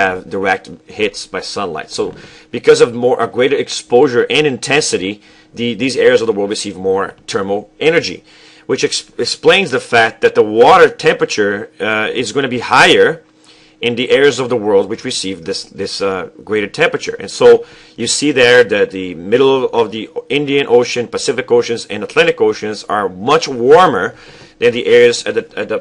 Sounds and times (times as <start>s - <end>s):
Speech: 0.0s - 13.2s, 13.8s - 25.8s.